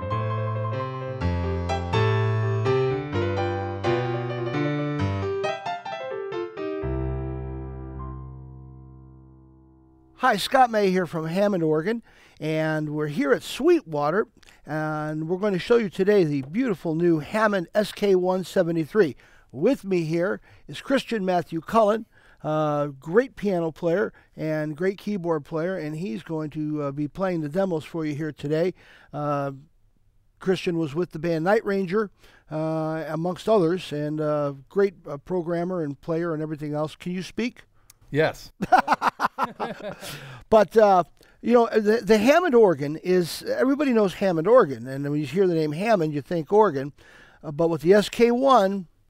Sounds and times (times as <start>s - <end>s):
Music: 0.0s - 10.2s
Speech: 10.2s - 29.6s, 30.4s - 38.5s, 40.5s - 46.9s, 47.5s - 48.9s.